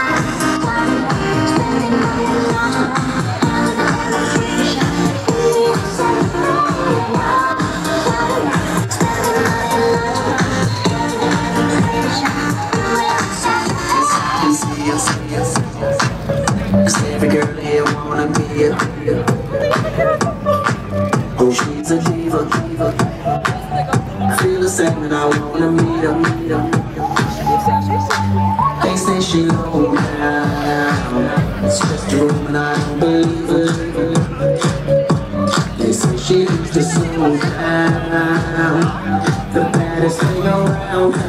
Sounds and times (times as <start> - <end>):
Music: 0.0 - 41.2
Speech: 2.3 - 20.7, 21.3 - 41.2.